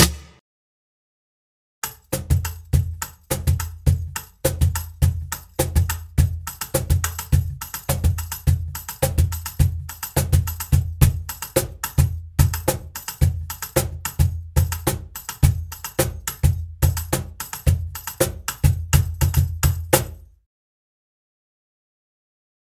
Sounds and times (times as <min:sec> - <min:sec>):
Music: 0:00.0 - 0:00.4, 0:01.8 - 0:20.4.